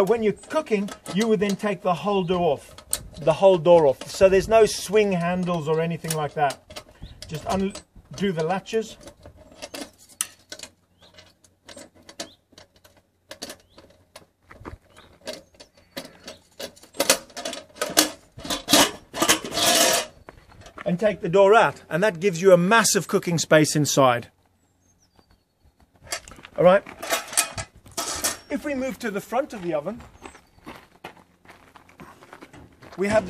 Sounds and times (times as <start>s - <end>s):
Speech: 0.0s - 6.6s, 7.3s - 9.0s, 20.8s - 24.3s, 26.6s - 26.9s, 28.5s - 30.0s, 33.0s - 33.2s
Outside, rural or natural: 0.0s - 33.2s.